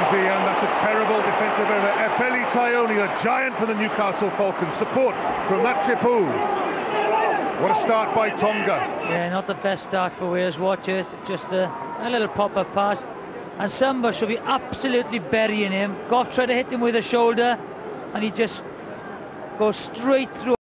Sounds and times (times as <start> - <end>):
Speech: 13.6 - 17.6, 19.6 - 20.6.